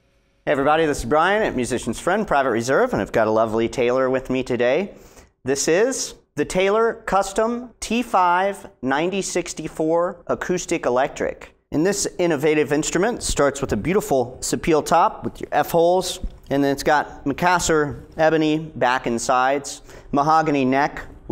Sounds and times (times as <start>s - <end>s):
Speech: 0.5s - 21.3s.